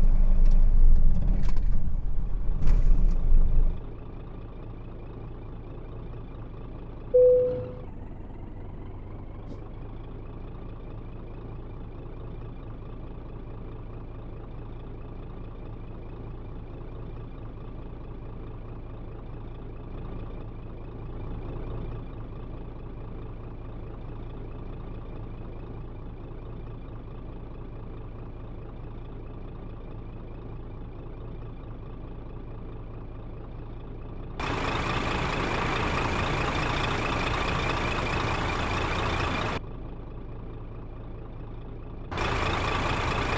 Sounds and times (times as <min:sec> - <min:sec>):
Vehicle: 0:00.0 - 0:43.3.